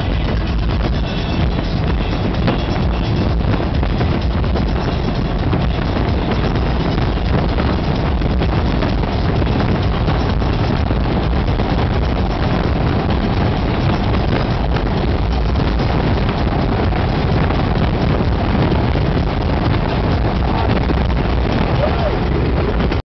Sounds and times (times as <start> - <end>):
Speech: 21.7 - 22.3.